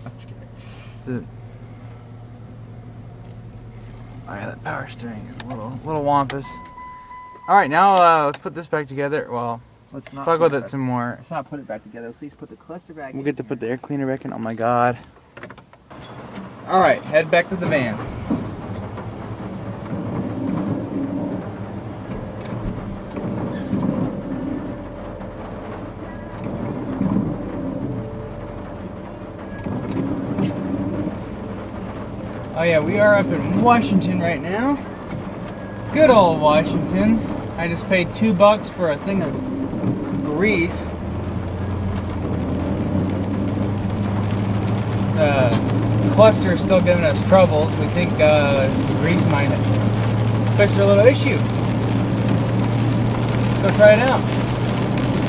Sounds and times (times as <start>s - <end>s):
Car: 0.0s - 55.2s
Speech: 4.3s - 6.6s, 7.5s - 15.0s, 16.7s - 18.0s, 32.6s - 34.8s, 35.9s - 39.4s, 40.2s - 40.9s, 45.2s - 49.6s, 50.6s - 51.5s, 53.6s - 54.2s.